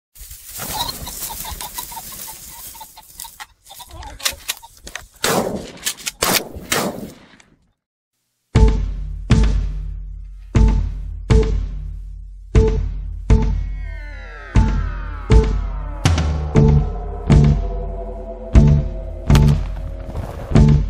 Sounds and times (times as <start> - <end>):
Outside, rural or natural: 0.1 - 7.8, 8.6 - 20.8
Music: 8.5 - 20.8.